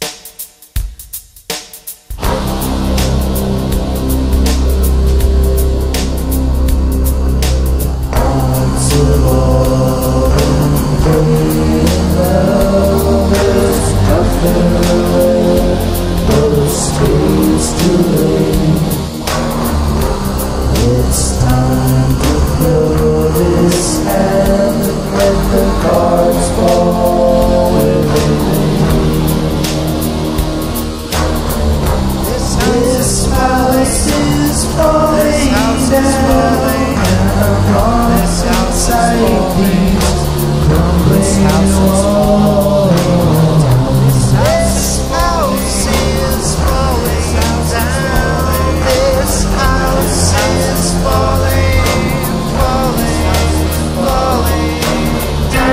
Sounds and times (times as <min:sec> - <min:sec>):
Music: 0:00.0 - 0:55.7.